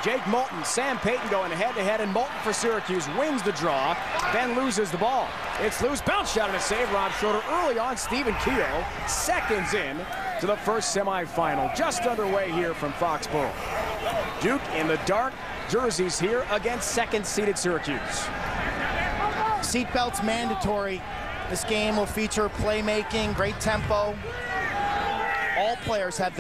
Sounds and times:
Speech: 0:00.0 - 0:13.6, 0:14.4 - 0:18.3, 0:19.4 - 0:24.2, 0:25.6 - 0:26.4.

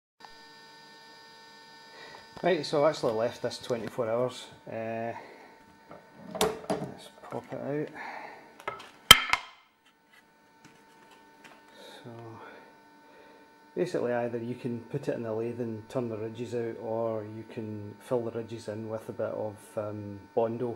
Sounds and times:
Speech: 0:02.4 - 0:05.3, 0:06.8 - 0:08.0, 0:12.0 - 0:12.6, 0:13.8 - 0:20.7.

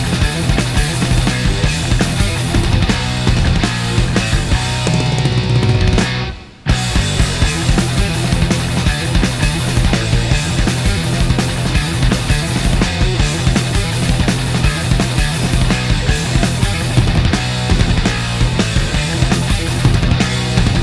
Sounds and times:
Electric guitar: 0:00.0 - 0:20.8
Strum: 0:01.1 - 0:09.0.

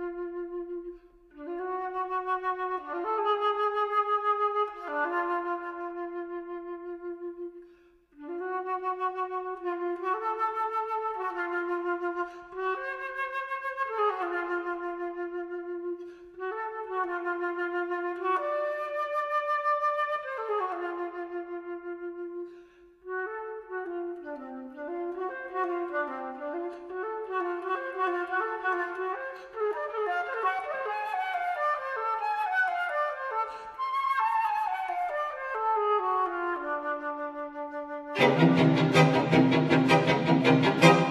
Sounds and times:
Wind instrument, woodwind instrument: 0:00.0 - 0:41.1.

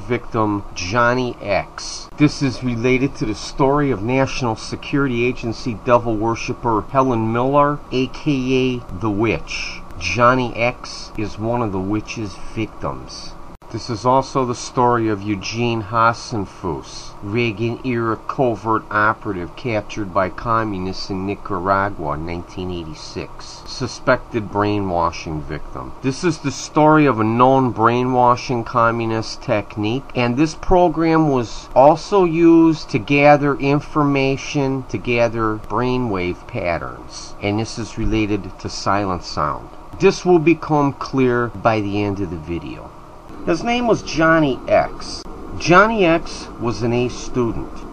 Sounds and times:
Speech: 0:00.0 - 0:47.8.

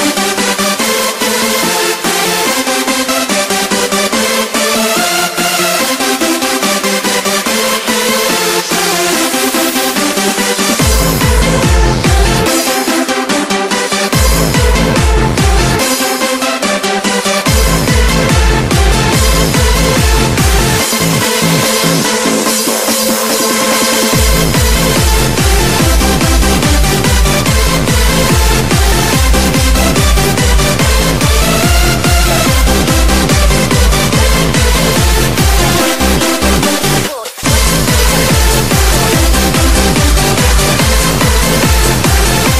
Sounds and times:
Electronic dance music: 0:00.0 - 0:42.5.

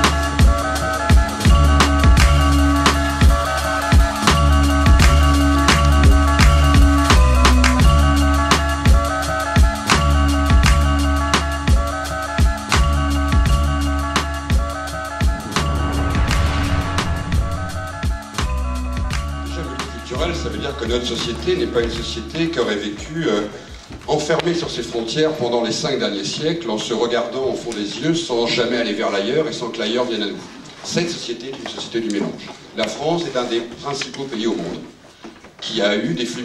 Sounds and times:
Music: 0:00.0 - 0:23.6
Speech: 0:19.5 - 0:35.0, 0:35.6 - 0:36.4.

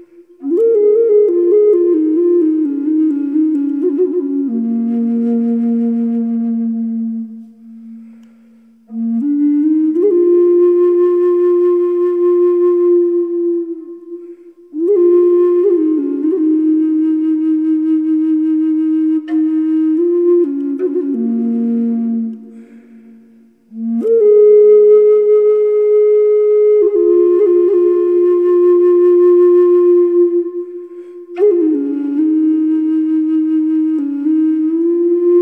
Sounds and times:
Flute: 0:00.0 - 0:35.4.

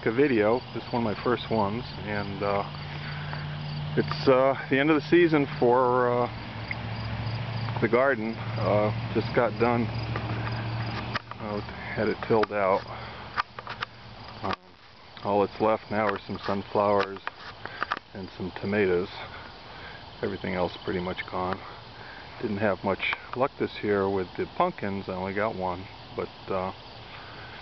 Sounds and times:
Speech: 0:00.0 - 0:02.7, 0:04.0 - 0:06.4, 0:07.8 - 0:09.9, 0:11.4 - 0:13.0, 0:14.4 - 0:17.3, 0:18.2 - 0:19.3, 0:20.2 - 0:21.7, 0:22.4 - 0:26.8.

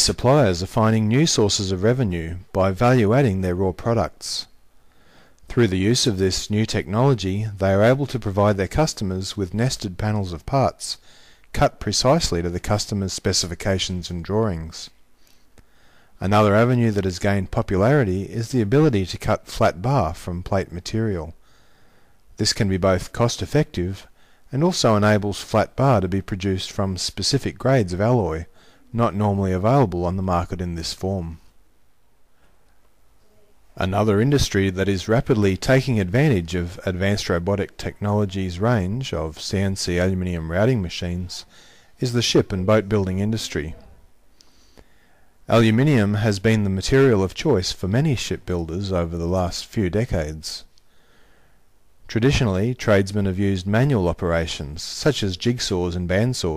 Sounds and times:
Speech: 0:00.0 - 0:04.6, 0:05.5 - 0:15.0, 0:16.2 - 0:21.4, 0:22.4 - 0:31.5, 0:33.2 - 0:44.1, 0:45.5 - 0:50.7, 0:52.1 - 0:56.5.

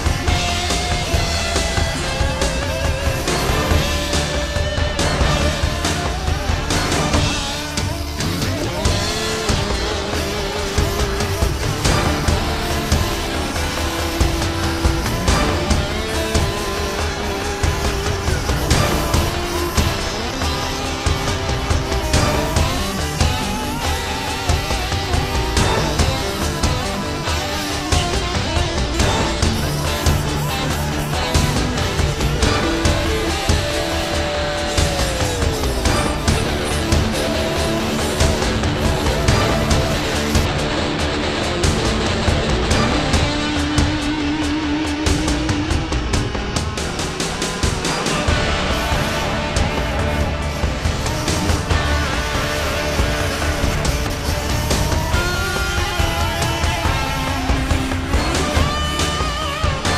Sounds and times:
Music: 0:00.0 - 0:59.9.

